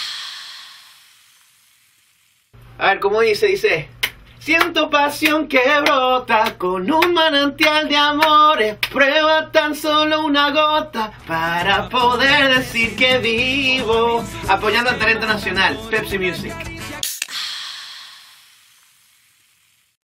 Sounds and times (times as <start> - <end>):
Music: 10.8 - 17.1.